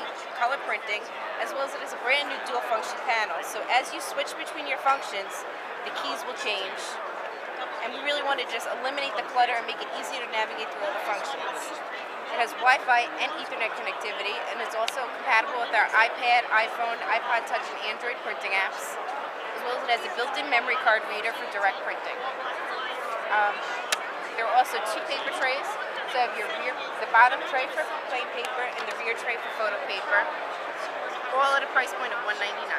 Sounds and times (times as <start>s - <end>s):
Speech: 0.0s - 7.0s, 7.8s - 19.0s, 19.6s - 23.8s, 24.4s - 30.3s, 31.2s - 32.7s.